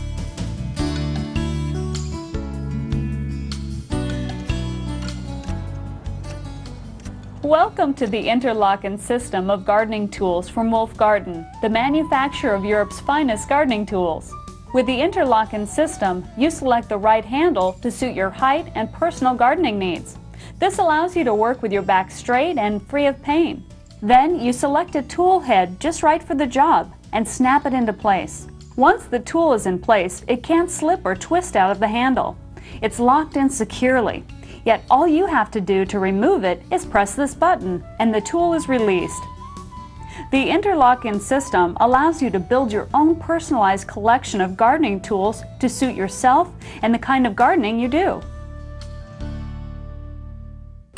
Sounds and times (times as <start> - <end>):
Music: 0.0 - 50.9
Speech: 7.5 - 39.2, 40.3 - 48.2.